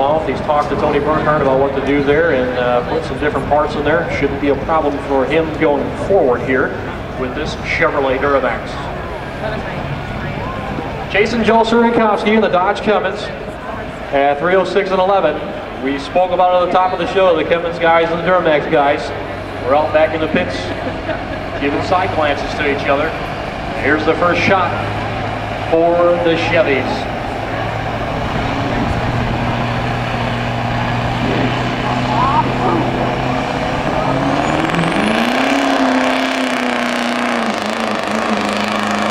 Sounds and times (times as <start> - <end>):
Speech: 0.0 - 20.9, 21.6 - 23.2, 23.8 - 24.9, 25.7 - 27.8, 31.8 - 33.0
Vehicle: 0.0 - 39.1.